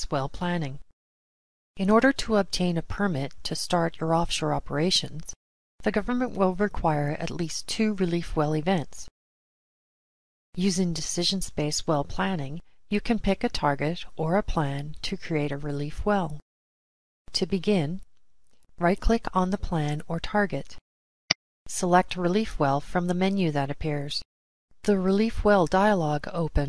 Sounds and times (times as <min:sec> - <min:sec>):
Speech: 0:00.0 - 0:00.8, 0:01.8 - 0:09.1, 0:10.6 - 0:16.4, 0:17.3 - 0:18.0, 0:18.8 - 0:20.8, 0:21.7 - 0:24.2, 0:24.8 - 0:26.6.